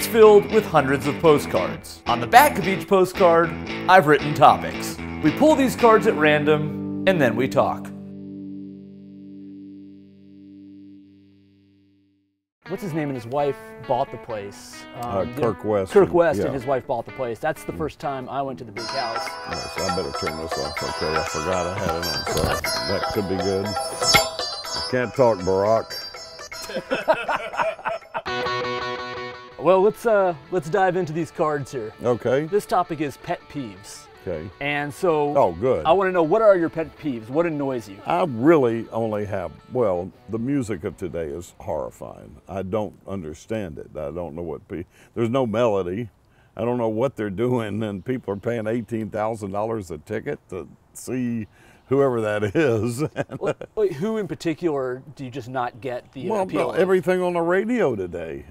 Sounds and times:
Speech: 0.0 - 7.9, 12.7 - 23.8, 24.9 - 25.9, 29.6 - 58.5
Music: 0.0 - 42.8, 56.3 - 58.2.

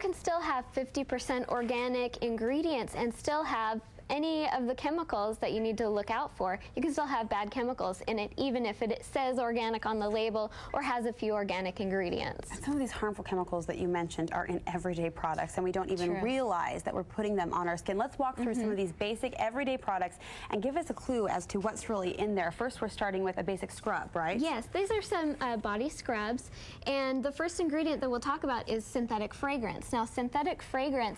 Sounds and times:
Speech: 0.0 - 31.1.

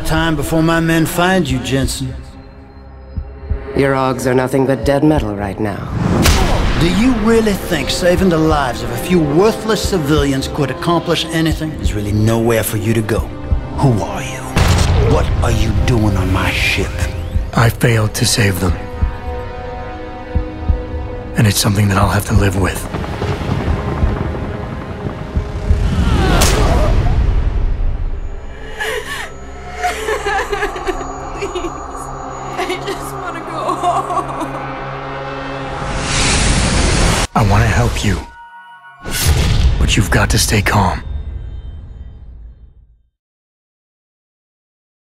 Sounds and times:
Music: 0.0 - 43.2
Speech: 21.4 - 22.8, 37.4 - 38.3, 39.8 - 41.0.

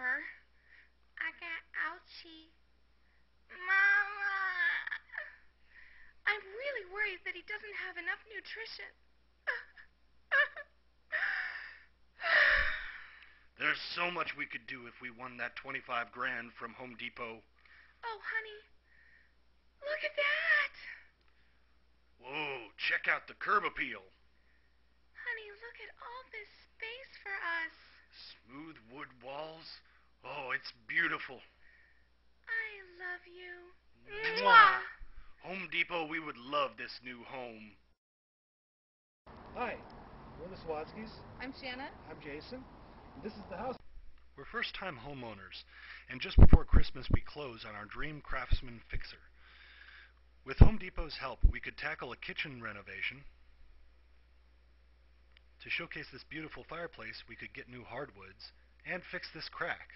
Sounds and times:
Narration, monologue: 0.0 - 38.0, 39.3 - 59.9
Gasp: 0.6 - 1.0, 5.6 - 6.2, 11.2 - 13.5, 17.6 - 18.0, 18.8 - 19.4, 31.6 - 32.1, 45.7 - 46.1, 49.4 - 50.2.

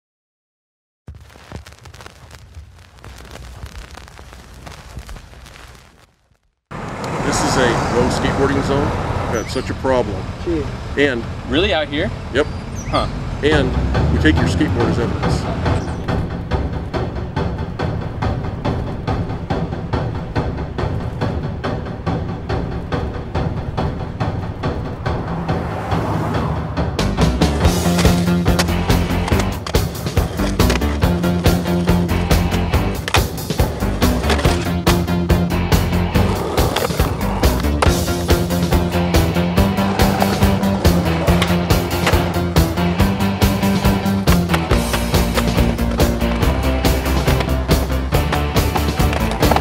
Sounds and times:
Speech: 7.2 - 15.6.

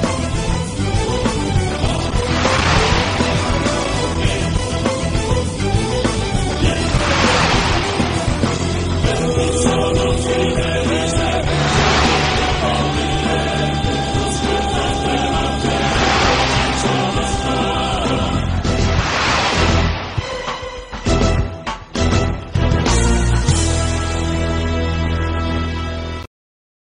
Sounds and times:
Music: 0.0 - 26.3.

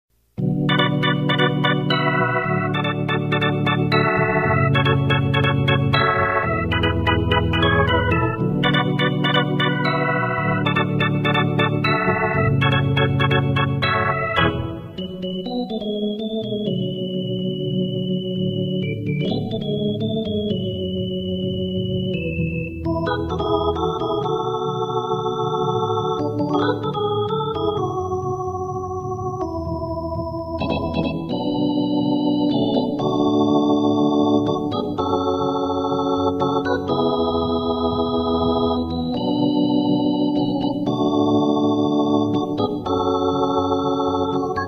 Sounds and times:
Electronic organ: 0.2 - 44.6.

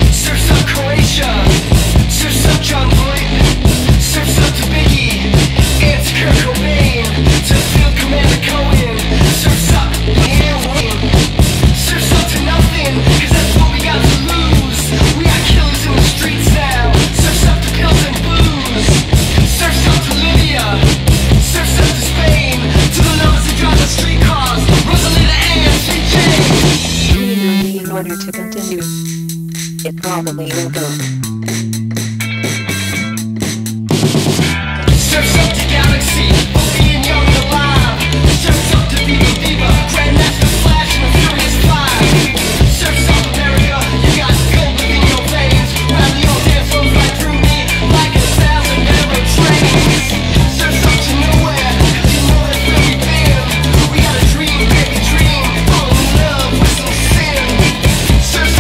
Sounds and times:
Pop music: 0.0 - 58.6.

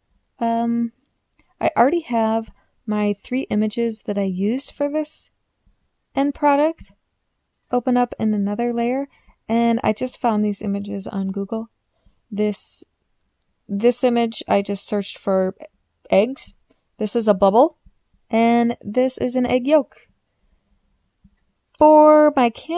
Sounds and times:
Speech: 0.4 - 0.9, 1.6 - 5.3, 6.2 - 6.9, 7.7 - 11.7, 12.4 - 12.9, 13.7 - 17.7, 18.3 - 20.0, 21.8 - 22.7.

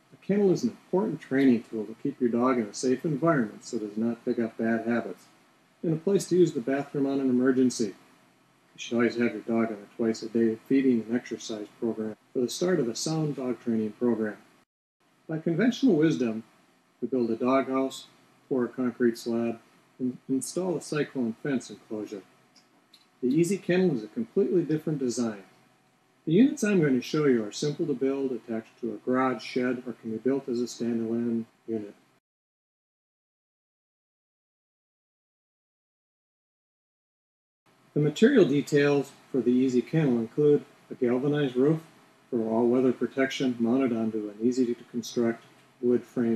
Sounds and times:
Speech: 0.2 - 8.0, 8.8 - 14.4, 15.3 - 16.4, 17.0 - 22.3, 23.2 - 25.5, 26.3 - 32.0, 38.0 - 46.3.

